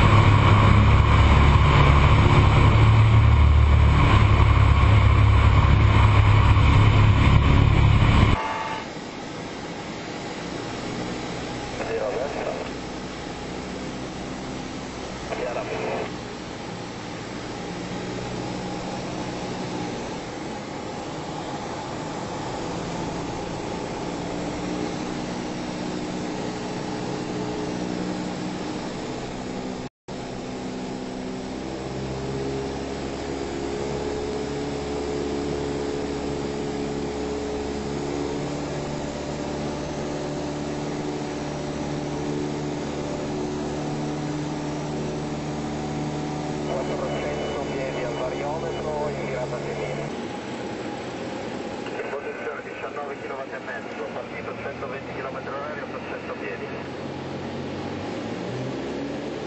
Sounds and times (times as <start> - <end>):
Fixed-wing aircraft, airplane: 0.0 - 59.4
Speech: 11.8 - 12.8, 15.3 - 16.1, 46.7 - 50.1, 51.9 - 56.9.